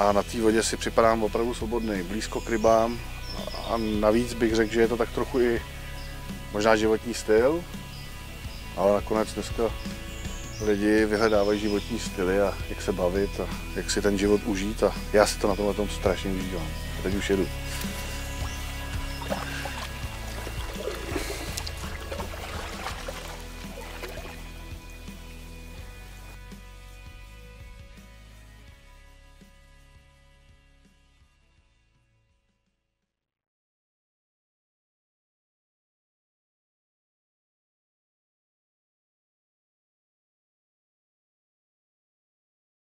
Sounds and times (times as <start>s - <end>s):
Music: 0.0s - 33.2s
Rowboat, canoe, kayak: 16.1s - 25.0s.